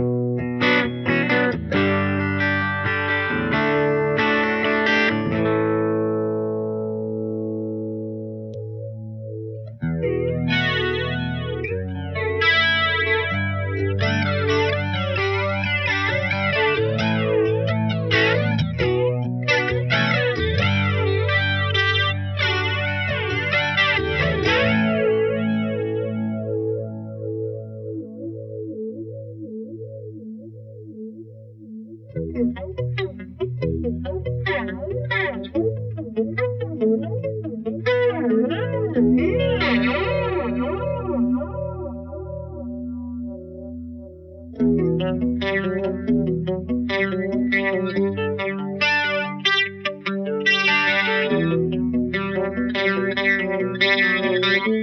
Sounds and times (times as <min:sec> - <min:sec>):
Music: 0:00.0 - 0:54.8.